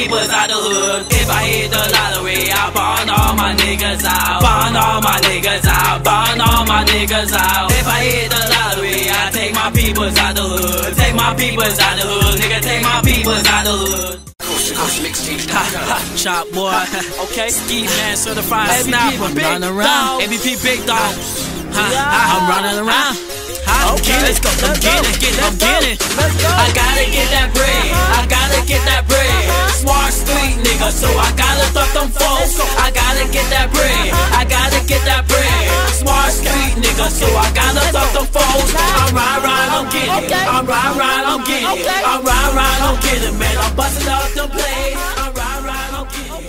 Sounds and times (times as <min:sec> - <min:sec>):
Hip hop music: 0:00.0 - 0:46.4.